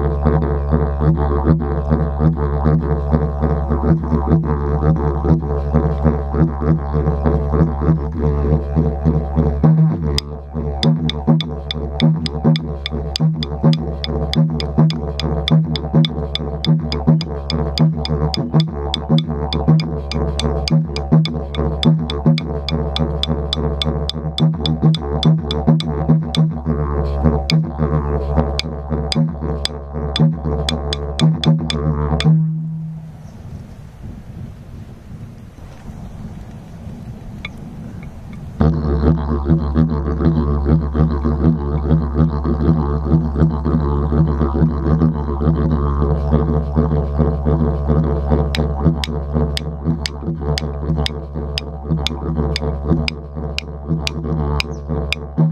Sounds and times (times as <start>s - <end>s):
Didgeridoo: 0.0s - 32.9s, 38.6s - 55.5s.